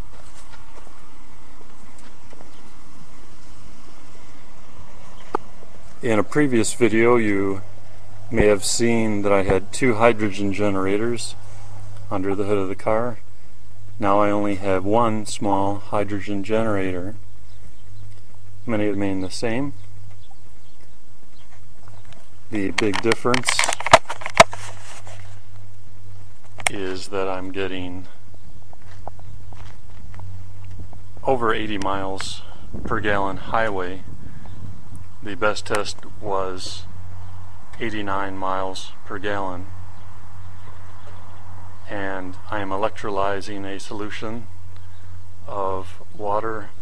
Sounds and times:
Speech: 6.0 - 7.6, 8.3 - 11.4, 12.1 - 13.2, 14.0 - 17.2, 18.6 - 19.8, 22.5 - 23.8, 26.7 - 28.2, 31.2 - 34.1, 35.2 - 36.9, 37.8 - 39.7, 41.9 - 44.5, 45.4 - 46.8.

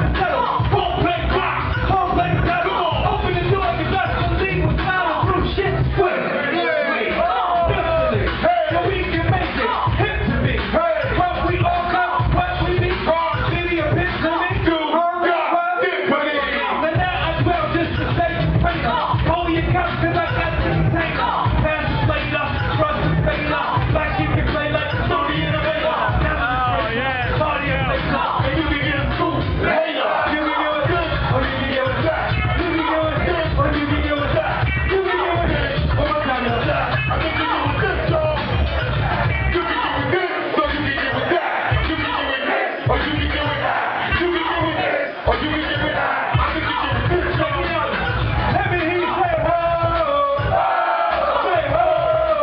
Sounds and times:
Speech: 0.0 - 50.6
Music: 0.0 - 52.4.

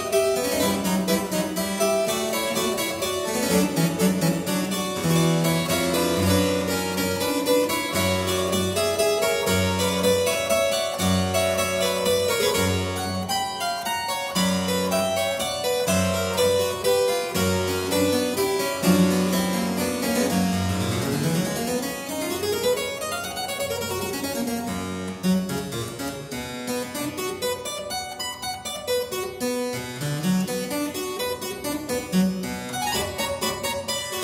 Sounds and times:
Harpsichord: 0.0 - 34.2.

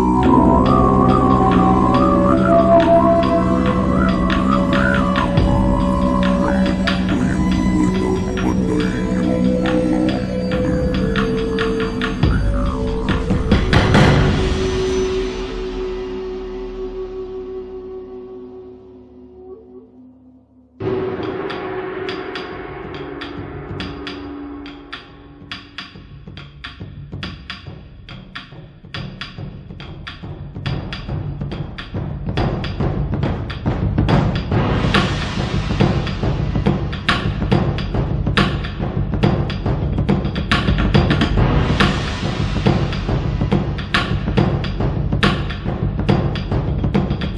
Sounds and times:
Music: 0.0 - 47.3.

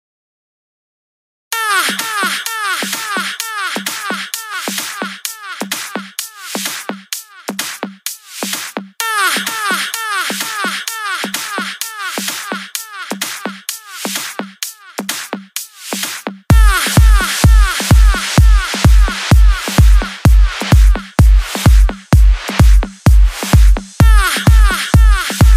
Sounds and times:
Electronic dance music: 1.6 - 25.5
Hip hop music: 1.6 - 25.5.

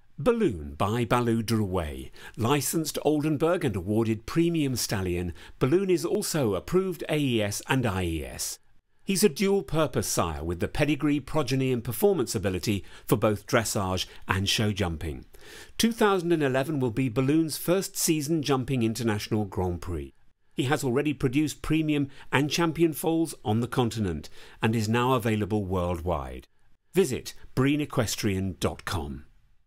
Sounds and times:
Speech: 0.2 - 29.3.

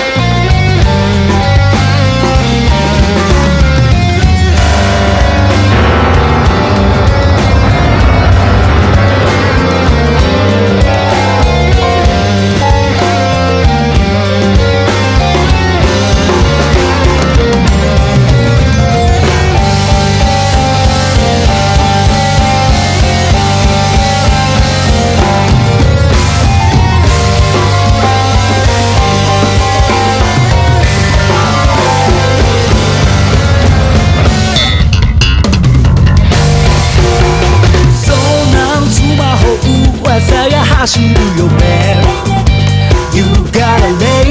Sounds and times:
Music: 0.0 - 44.3.

